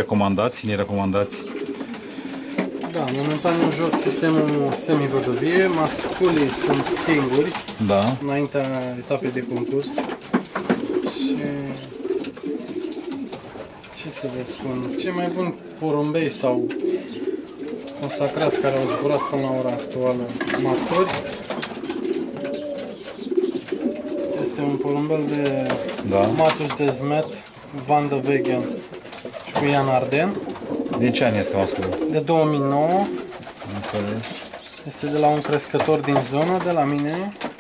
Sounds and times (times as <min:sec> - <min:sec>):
Pigeon, dove: 0:09.1 - 0:15.5, 0:16.6 - 0:32.2.